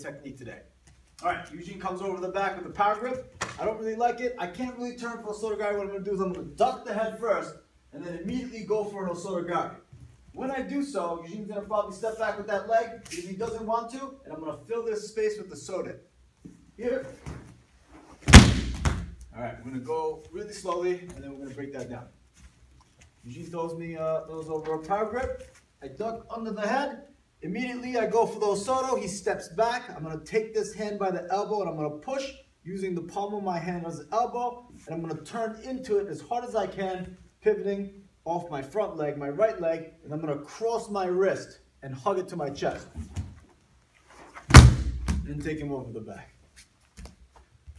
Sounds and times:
Speech: 0:00.0 - 0:16.1, 0:16.8 - 0:17.3, 0:19.3 - 0:22.2, 0:23.2 - 0:43.0, 0:45.1 - 0:46.4.

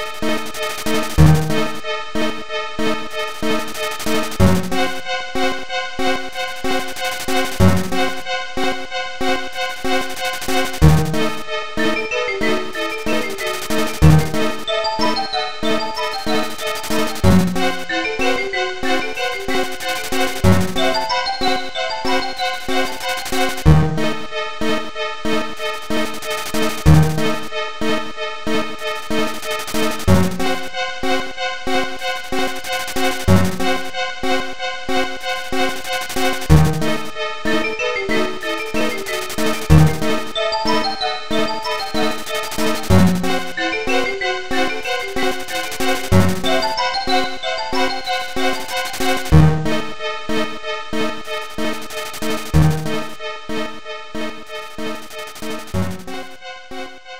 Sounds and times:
Music: 0:00.0 - 0:57.1.

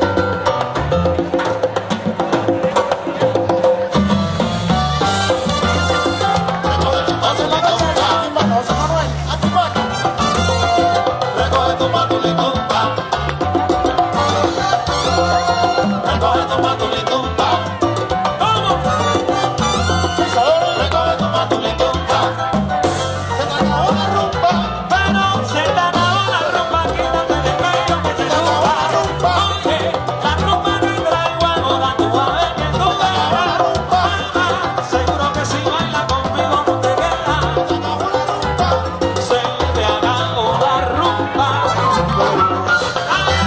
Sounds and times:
Crowd: 0:00.0 - 0:43.4
Music: 0:00.0 - 0:43.4.

